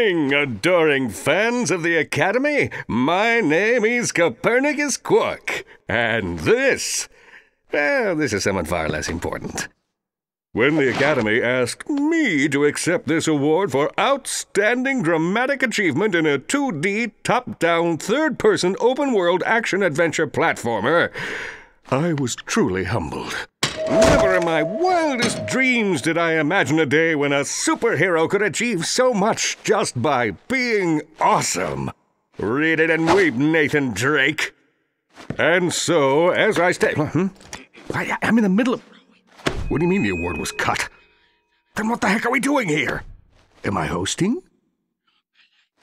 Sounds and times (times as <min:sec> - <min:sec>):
Speech: 0:00.0 - 0:09.8, 0:10.5 - 0:21.2, 0:21.9 - 0:34.6, 0:35.4 - 0:39.0, 0:39.7 - 0:41.0, 0:41.8 - 0:44.6.